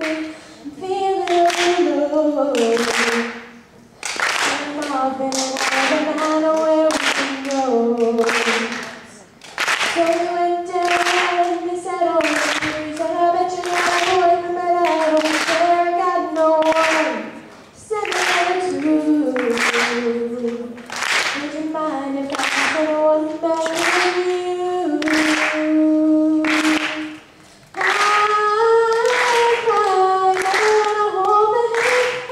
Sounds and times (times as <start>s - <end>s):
Female singing: 0.0s - 3.4s, 4.4s - 27.2s, 27.8s - 32.3s.